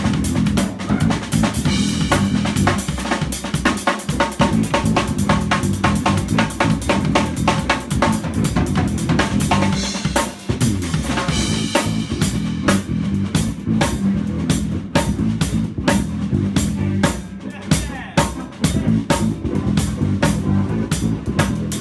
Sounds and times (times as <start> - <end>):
Drum kit: 0.0 - 21.8.